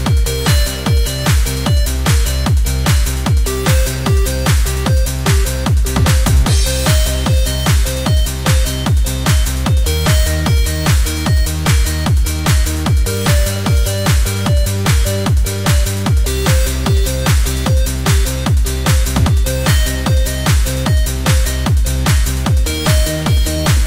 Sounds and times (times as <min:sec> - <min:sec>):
Techno: 0:00.0 - 0:23.8.